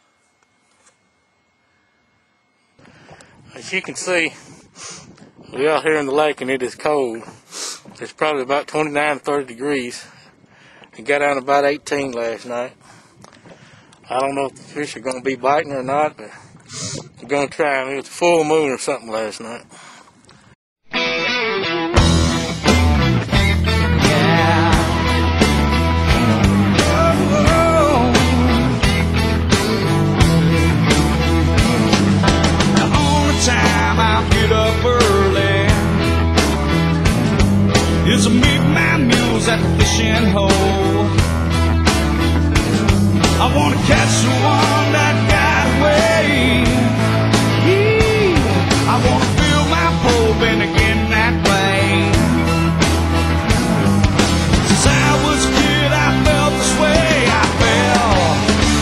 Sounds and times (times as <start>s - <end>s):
Music: 20.9s - 58.8s.